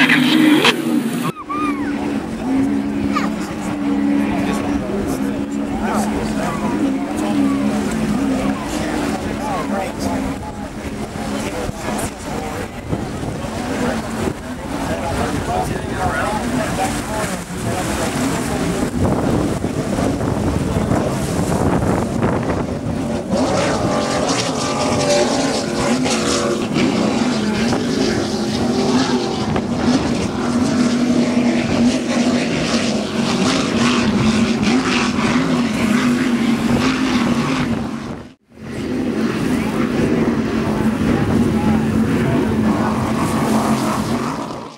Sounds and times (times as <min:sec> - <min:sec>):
Motorboat, speedboat: 0:00.0 - 0:44.7
Wind noise (microphone): 0:10.2 - 0:25.6, 0:26.6 - 0:32.8, 0:33.4 - 0:44.6.